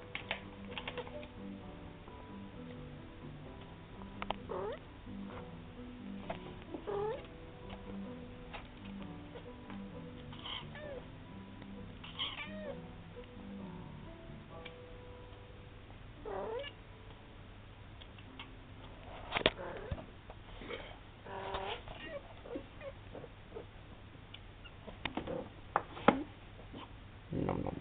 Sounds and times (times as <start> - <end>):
Cat: 4.5 - 4.8, 6.8 - 7.3, 10.3 - 11.0, 12.0 - 12.8, 16.2 - 16.8, 19.4 - 20.1, 21.3 - 23.7.